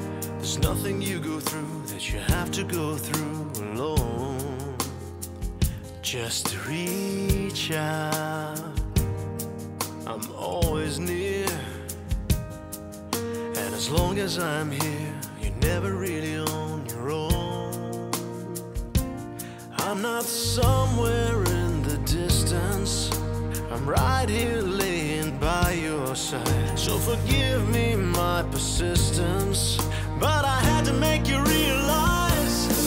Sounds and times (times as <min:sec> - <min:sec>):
Music: 0:00.0 - 0:32.8.